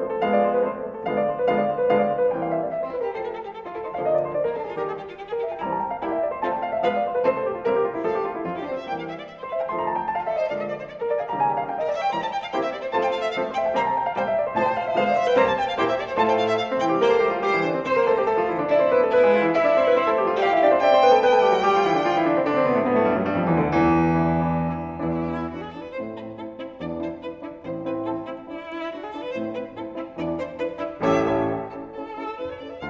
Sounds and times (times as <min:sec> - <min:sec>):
Violin, fiddle: 0:00.0 - 0:23.2, 0:23.8 - 0:32.8.